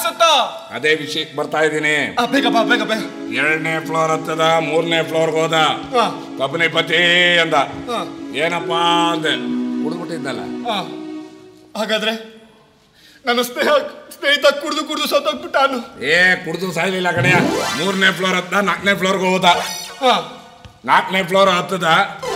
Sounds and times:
Male speech, man speaking: 0:00.0 - 0:11.0, 0:11.8 - 0:12.4, 0:13.2 - 0:22.3.

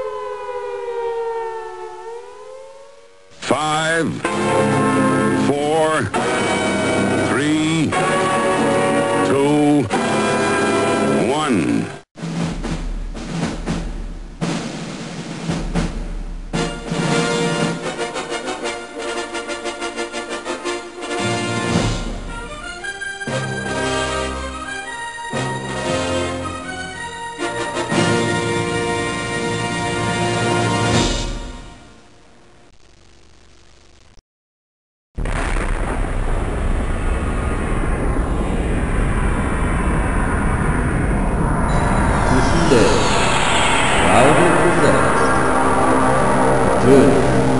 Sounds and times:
Music: 0:04.2 - 0:32.0, 0:44.0 - 0:47.5.

